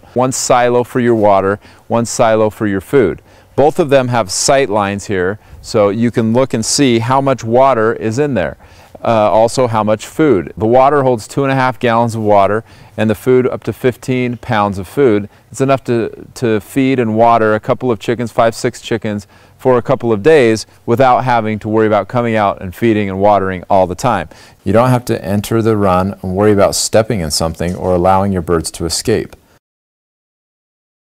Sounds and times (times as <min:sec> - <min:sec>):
Speech: 0:00.2 - 0:29.4.